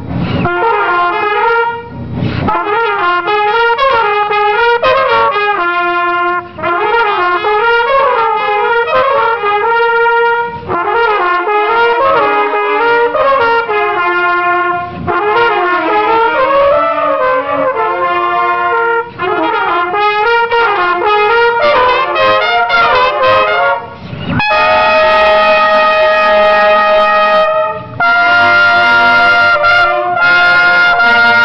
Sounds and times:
Trumpet: 0.0 - 31.4.

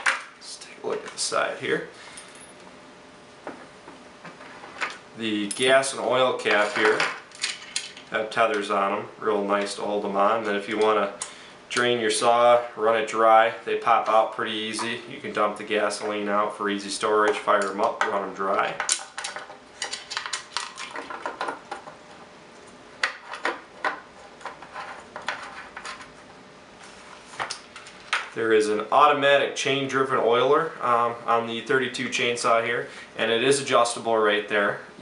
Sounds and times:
Speech: 0.4 - 1.9, 5.2 - 7.1, 8.1 - 18.8, 28.4 - 34.9
Tools: 18.8 - 21.6.

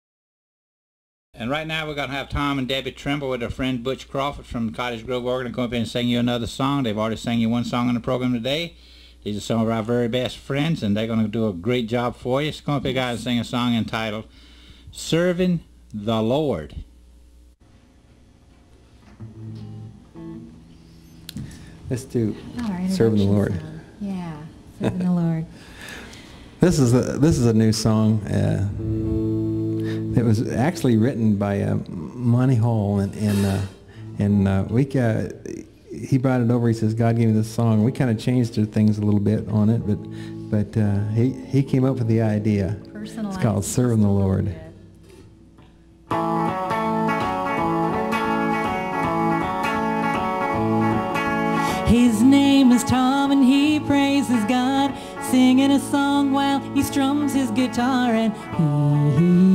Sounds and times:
Speech: 1.4 - 14.3, 26.6 - 28.8, 30.2 - 40.0, 40.6 - 44.8
Music: 19.1 - 21.3, 28.2 - 31.0, 39.4 - 44.8, 46.1 - 59.5.

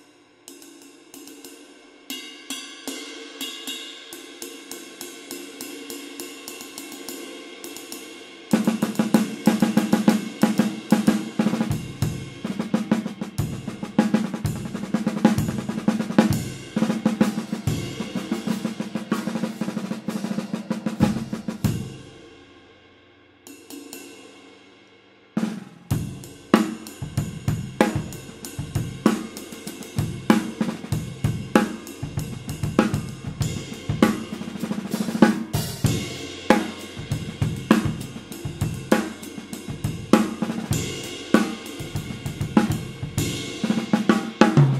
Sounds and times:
Drum kit: 0.0 - 22.7, 25.4 - 44.7
Drum roll: 8.5 - 22.4, 25.4 - 44.7
Bass drum: 11.5 - 20.0, 20.9 - 22.0, 27.0 - 29.2, 30.0 - 43.8.

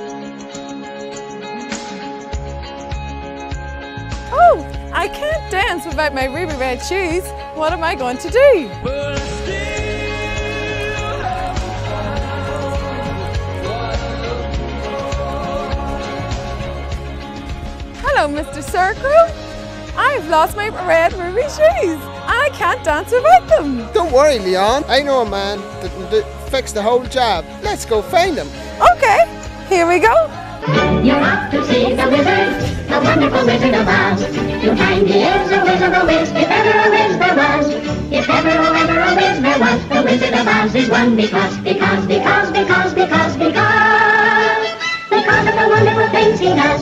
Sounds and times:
Music: 0.0 - 46.8.

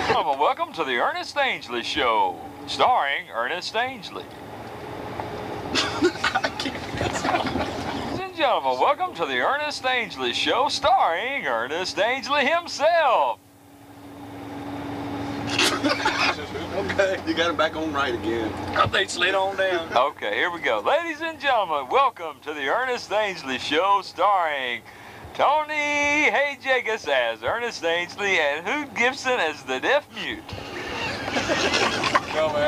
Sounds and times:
Speech: 0.0 - 4.3, 8.2 - 13.4, 16.1 - 24.8, 25.4 - 30.5, 32.2 - 32.6.

